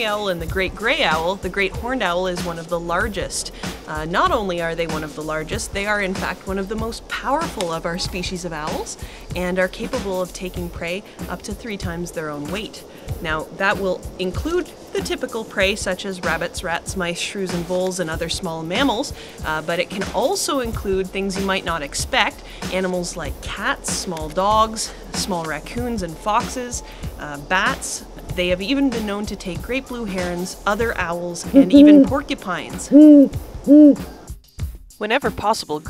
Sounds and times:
Speech: 0:00.0 - 0:33.0, 0:35.0 - 0:35.8
Music: 0:00.0 - 0:35.8.

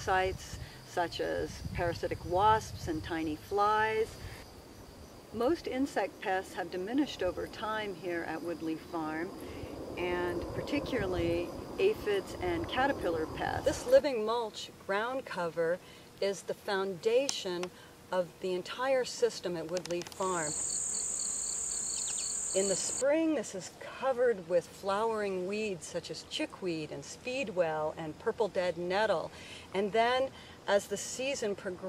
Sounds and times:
Speech: 0:00.0 - 0:04.1, 0:05.4 - 0:09.3, 0:10.0 - 0:20.6, 0:22.6 - 0:31.8
Bee, wasp, etc.: 0:00.0 - 0:23.6
Outside, rural or natural: 0:00.0 - 0:31.8.

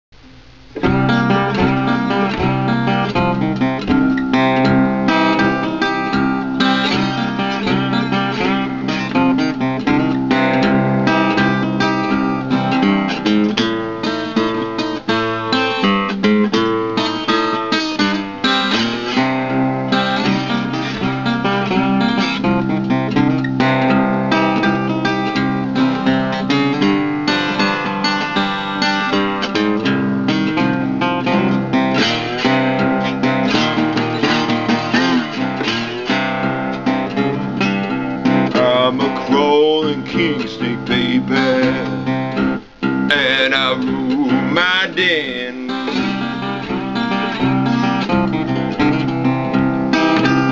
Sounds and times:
Strum: 0:00.1 - 0:50.5.

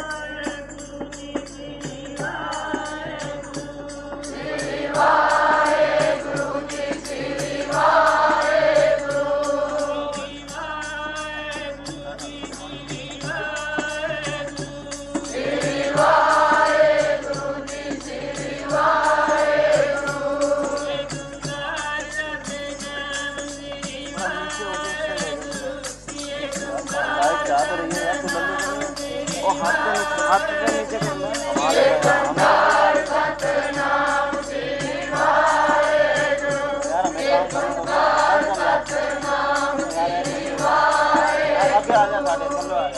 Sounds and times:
Male singing: 0:00.0 - 0:04.4, 0:09.4 - 0:16.8, 0:20.0 - 0:33.2, 0:35.4 - 0:42.9
Music: 0:00.0 - 0:42.9.

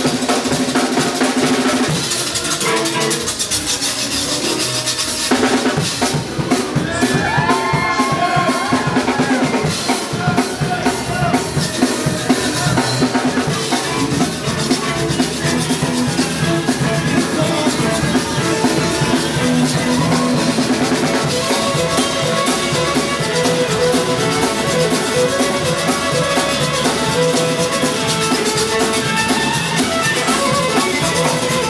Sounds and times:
Music: 0:00.0 - 0:31.6.

